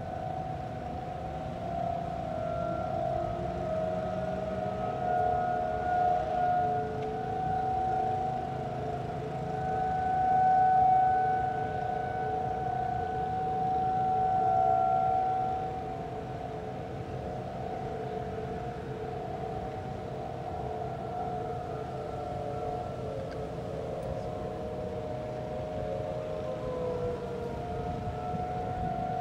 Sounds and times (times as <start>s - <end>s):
Siren: 0.0s - 29.2s.